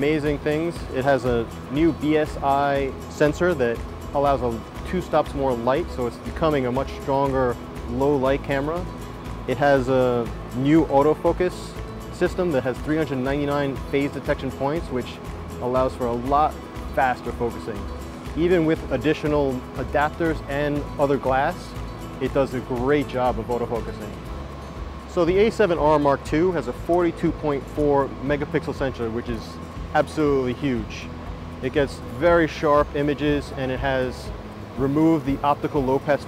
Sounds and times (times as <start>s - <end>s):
Speech: 0.0s - 8.8s, 9.5s - 17.8s, 18.4s - 24.2s, 25.1s - 36.2s
Music: 0.0s - 36.2s.